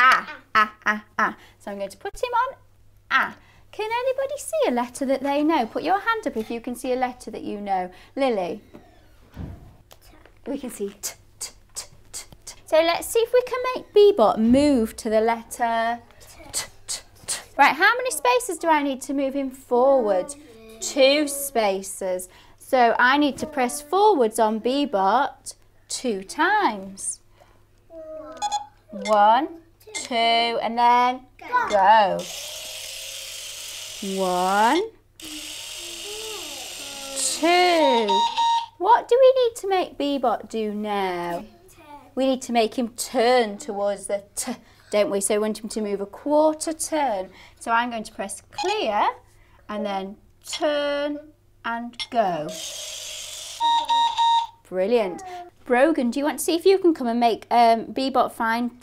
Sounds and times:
Child speech, kid speaking: 0.0 - 0.5, 16.2 - 16.8, 20.0 - 21.8, 23.2 - 24.9, 27.9 - 28.5, 31.4 - 31.9, 35.3 - 38.1, 41.2 - 42.2, 54.8 - 55.6.

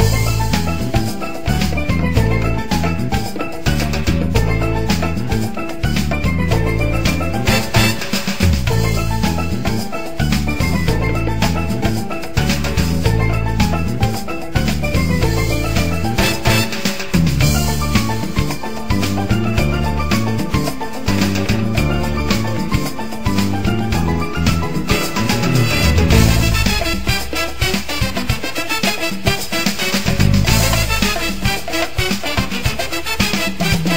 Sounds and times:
Music: 0.0 - 33.9.

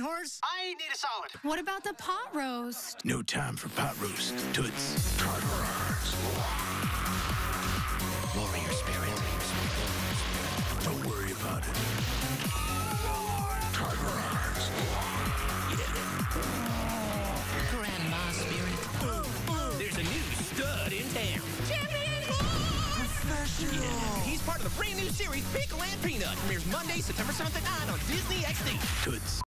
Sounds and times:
Music: 3.6 - 29.4.

